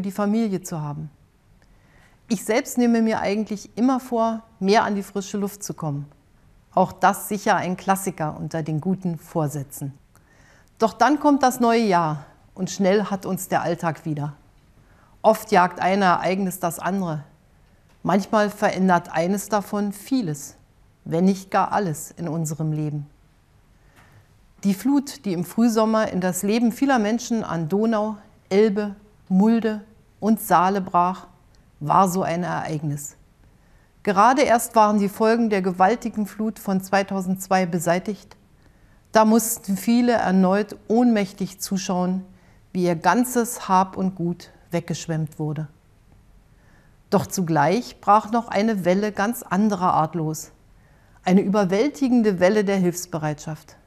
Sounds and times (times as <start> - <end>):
Female speech, woman speaking: 0.0 - 1.2, 2.3 - 6.2, 6.8 - 10.0, 10.8 - 14.4, 15.2 - 17.3, 18.0 - 23.1, 24.6 - 33.2, 34.1 - 38.4, 39.2 - 45.8, 47.2 - 50.6, 51.3 - 53.8.